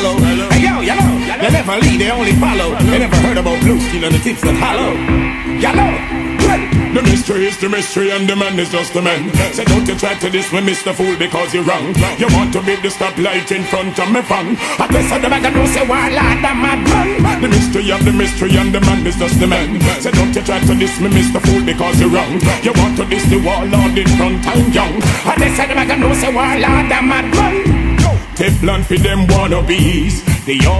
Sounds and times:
Reggae: 0.0 - 30.7.

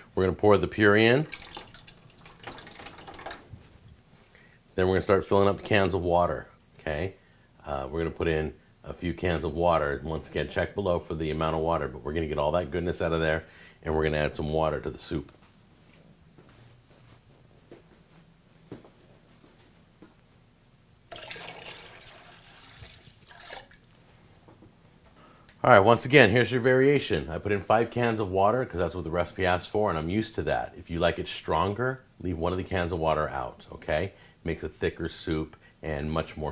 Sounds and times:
Inside, small room: 0.0 - 36.5
Speech: 0.1 - 1.3, 4.8 - 15.4, 25.6 - 36.5.

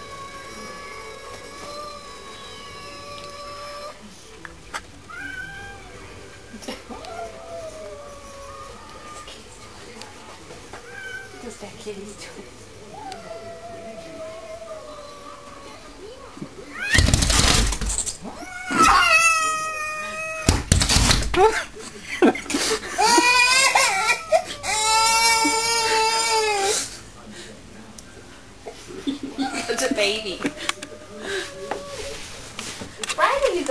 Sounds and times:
Cat: 0.0 - 4.0, 5.1 - 6.0, 10.8 - 11.4, 16.7 - 21.1.

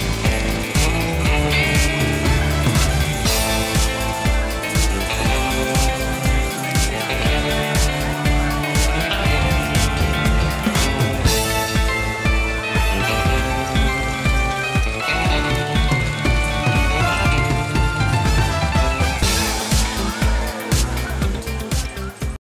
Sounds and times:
Music: 0.0 - 22.4.

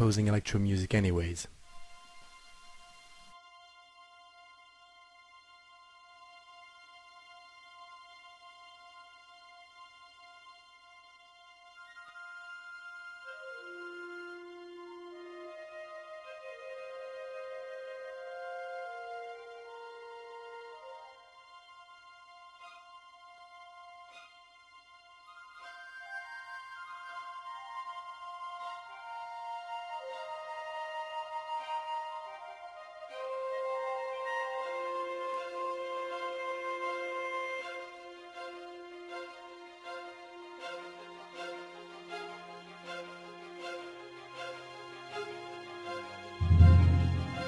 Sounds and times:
Tender music: 1.7 - 47.4.

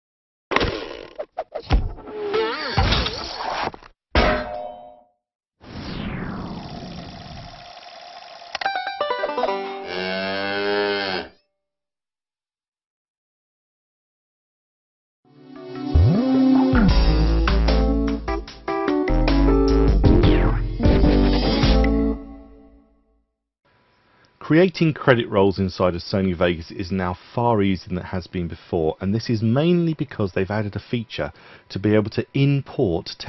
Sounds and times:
Clang: 4.2 - 5.1.

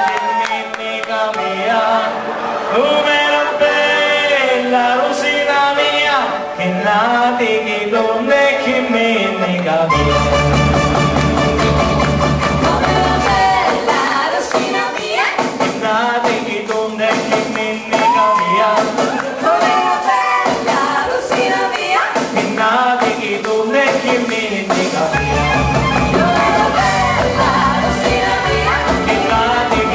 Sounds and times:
Soul music: 0.0 - 29.9.

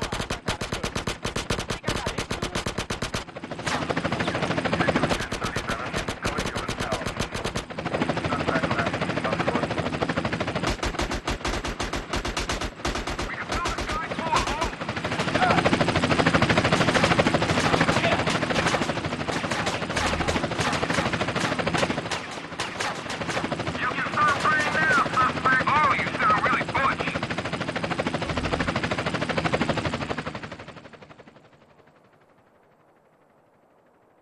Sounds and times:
Speech: 8.3 - 9.8, 13.3 - 14.8, 17.9 - 18.3, 23.8 - 27.2.

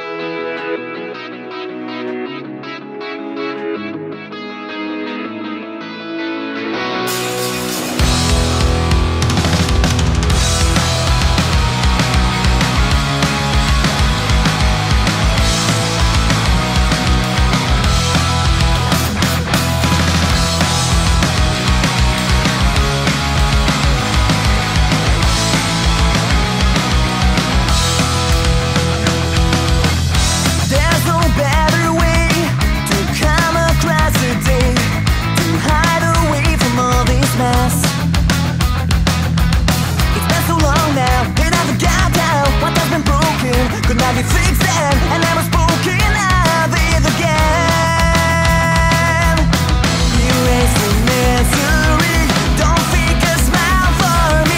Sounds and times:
Music: 0.0 - 54.5.

